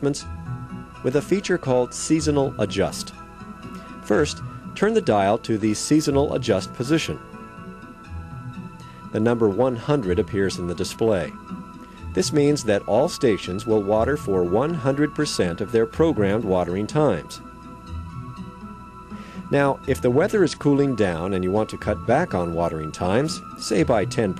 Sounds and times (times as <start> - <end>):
Speech: 0.0 - 0.2, 1.0 - 3.1, 4.1 - 7.2, 9.2 - 11.4, 12.2 - 17.4, 19.5 - 24.3
Music: 0.0 - 24.3.